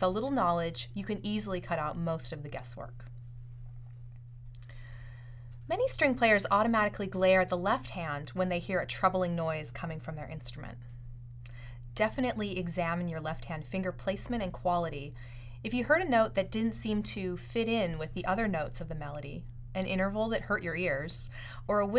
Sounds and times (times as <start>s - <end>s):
Speech: 0.0s - 3.1s, 5.7s - 10.8s, 12.0s - 21.9s.